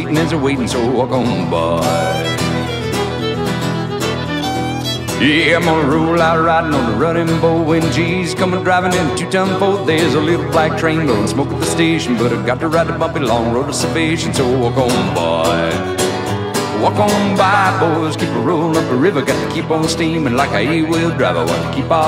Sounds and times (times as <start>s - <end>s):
Music: 0.0s - 22.0s.